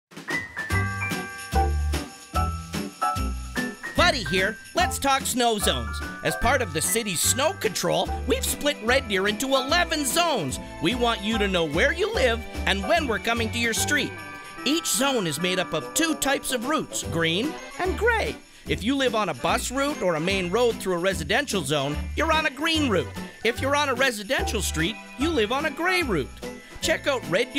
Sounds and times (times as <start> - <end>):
Jingle bell: 0.3 - 27.5.